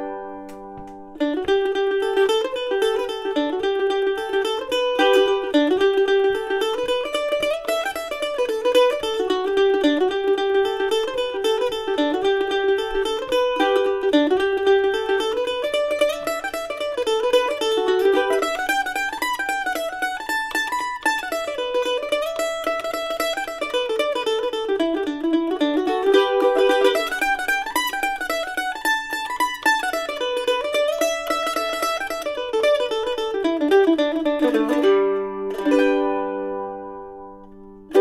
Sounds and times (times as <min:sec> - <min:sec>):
Mandolin: 0:00.0 - 0:38.0.